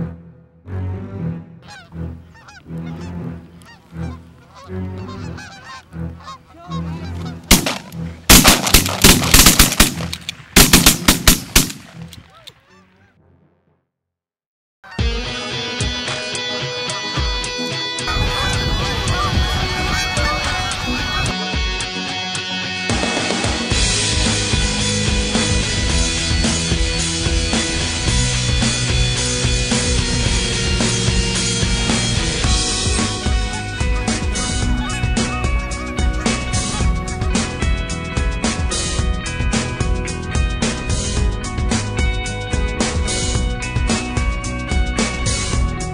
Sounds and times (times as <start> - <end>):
Music: 0.0 - 13.9, 14.8 - 45.9
Duck: 1.6 - 7.4, 18.1 - 21.4, 33.0 - 37.5
Machine gun: 7.5 - 11.8.